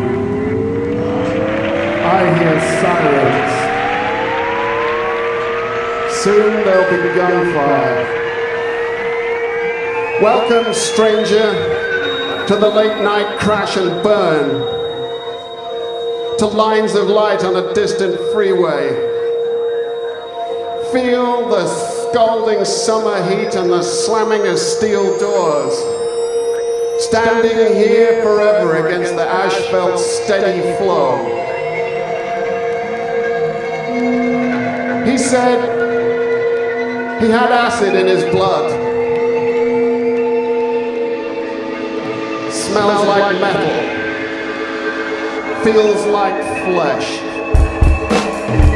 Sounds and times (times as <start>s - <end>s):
Music: 0.0s - 48.7s
Speech: 2.0s - 3.7s, 6.1s - 8.0s, 10.2s - 11.7s, 12.5s - 14.7s, 16.4s - 19.1s, 20.8s - 25.8s, 27.0s - 31.4s, 35.0s - 35.8s, 37.2s - 38.8s, 42.5s - 44.0s, 45.6s - 47.4s.